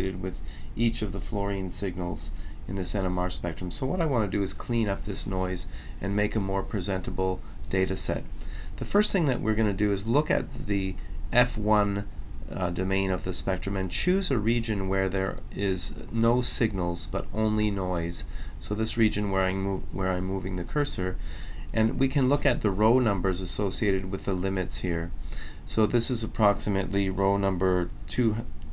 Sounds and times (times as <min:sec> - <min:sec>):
Speech: 0:00.0 - 0:28.5.